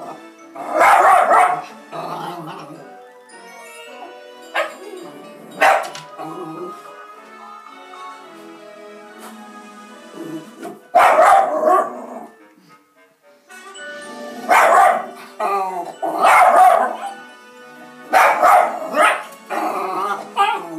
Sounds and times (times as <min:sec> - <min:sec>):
Music: 0:00.0 - 0:20.7
Dog: 0:00.8 - 0:01.6, 0:05.6 - 0:06.0, 0:11.0 - 0:12.0, 0:14.5 - 0:15.1.